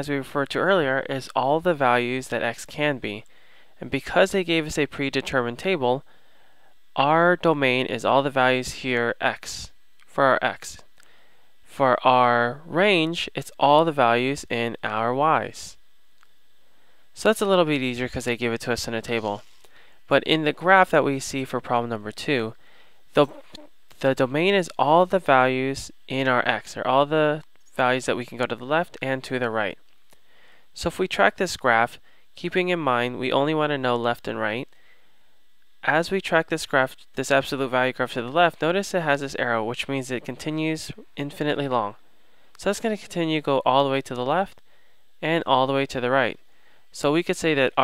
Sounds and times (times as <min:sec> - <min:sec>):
Speech: 0:00.0 - 0:03.2, 0:03.8 - 0:06.0, 0:07.0 - 0:10.9, 0:11.7 - 0:15.8, 0:17.2 - 0:19.5, 0:20.1 - 0:29.8, 0:30.8 - 0:34.7, 0:35.8 - 0:42.0, 0:42.6 - 0:44.6, 0:45.2 - 0:47.8.